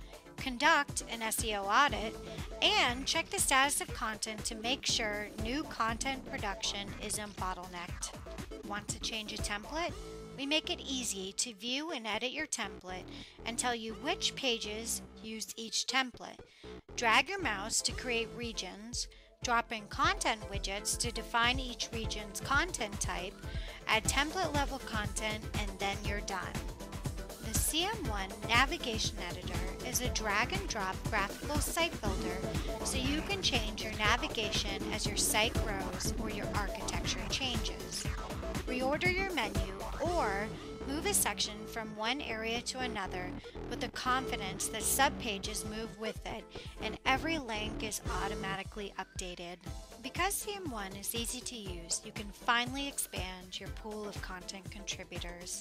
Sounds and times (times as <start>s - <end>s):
Music: 0.0s - 55.6s
Speech: 0.4s - 8.1s, 8.7s - 16.4s, 17.0s - 26.6s, 27.5s - 38.0s, 38.7s - 55.6s.